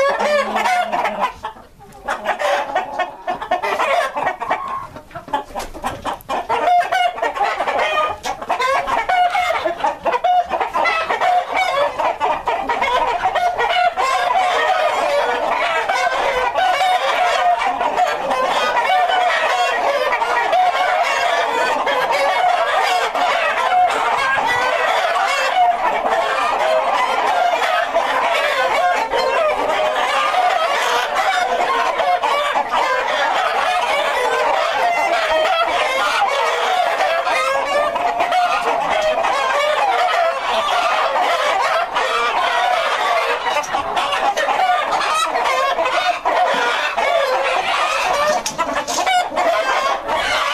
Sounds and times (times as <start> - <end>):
Cluck: 0.0 - 50.5.